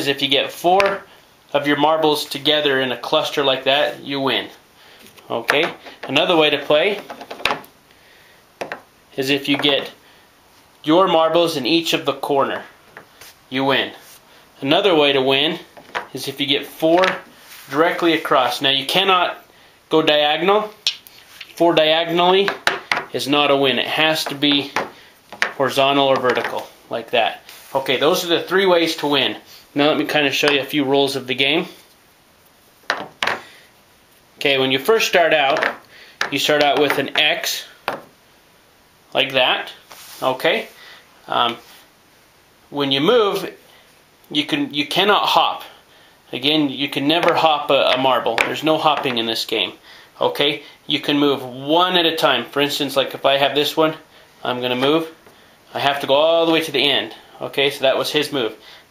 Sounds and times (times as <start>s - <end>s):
Speech: 0.0s - 4.6s, 5.2s - 7.1s, 9.2s - 10.0s, 10.8s - 12.7s, 13.5s - 14.0s, 14.6s - 20.8s, 21.6s - 22.6s, 23.2s - 24.8s, 25.6s - 31.8s, 34.4s - 37.8s, 39.2s - 41.6s, 42.7s - 43.6s, 44.3s - 58.6s.